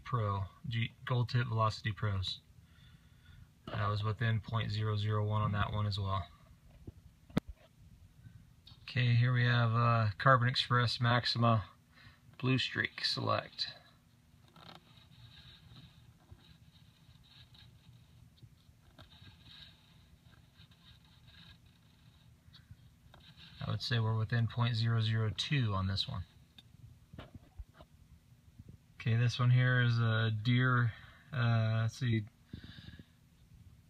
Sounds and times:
Speech: 0.0 - 2.4, 3.7 - 6.4, 8.8 - 11.8, 12.4 - 13.9, 23.6 - 26.3, 29.0 - 32.3.

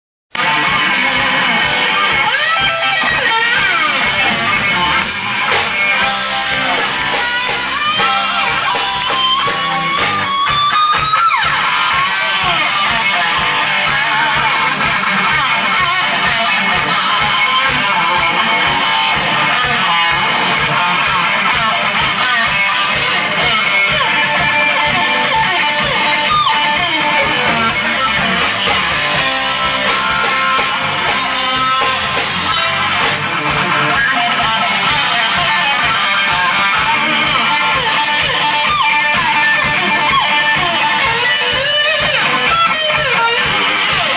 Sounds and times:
Electric guitar: 0.3 - 44.1
Rock music: 0.3 - 44.1.

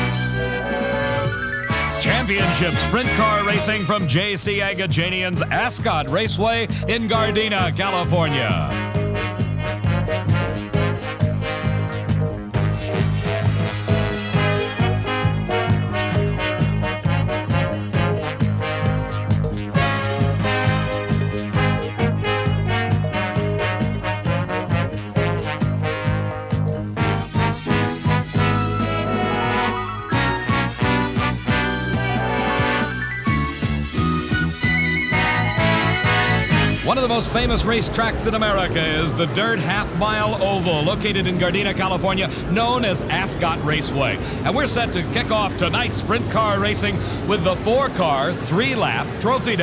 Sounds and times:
Music: 0.0 - 49.6.

